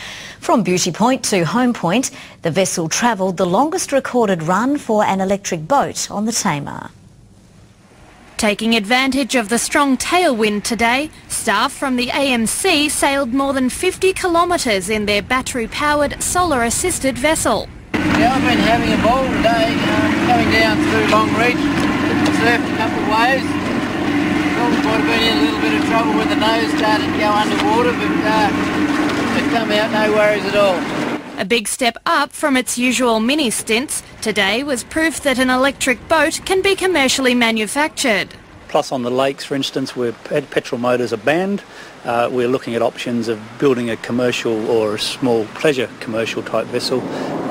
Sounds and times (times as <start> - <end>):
Motorboat, speedboat: 8.0 - 31.4, 32.8 - 41.3, 41.9 - 47.5.